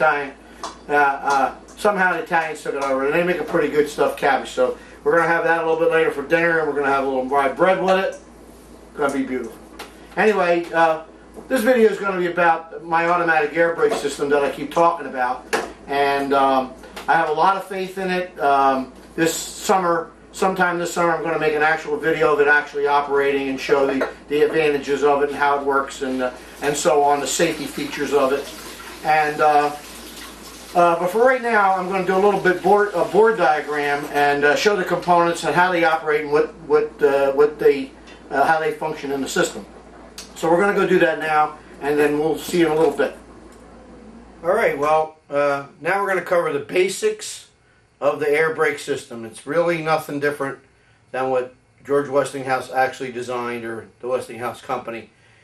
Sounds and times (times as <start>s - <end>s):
Speech: 0.0s - 8.2s, 9.0s - 9.6s, 10.2s - 29.9s, 30.7s - 43.2s, 44.4s - 55.1s.